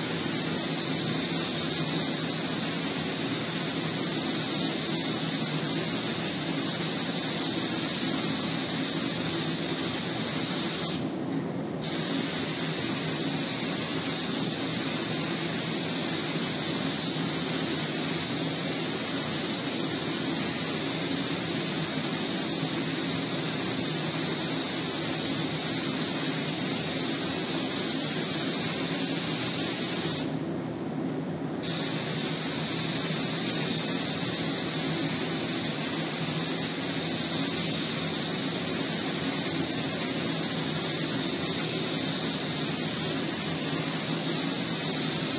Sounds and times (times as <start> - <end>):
Spray: 0.0 - 11.2, 11.8 - 30.4, 31.6 - 45.3.